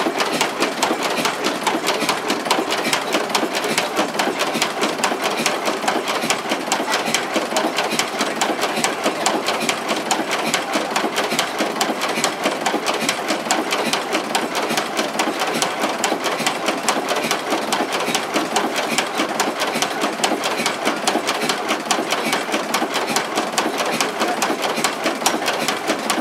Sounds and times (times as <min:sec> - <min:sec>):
Heavy engine (low frequency): 0:00.0 - 0:26.2.